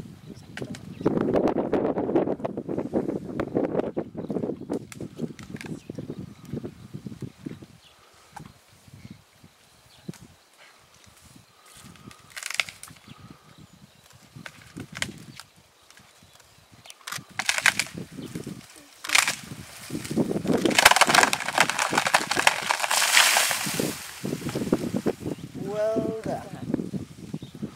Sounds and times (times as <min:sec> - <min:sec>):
Outside, rural or natural: 0:00.0 - 0:27.7
Speech: 0:25.6 - 0:26.7.